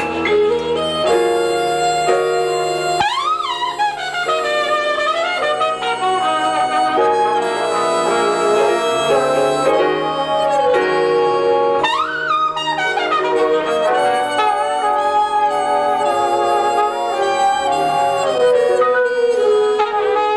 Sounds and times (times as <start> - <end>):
Inside, large room or hall: 0.0 - 20.3
Music: 0.0 - 20.3.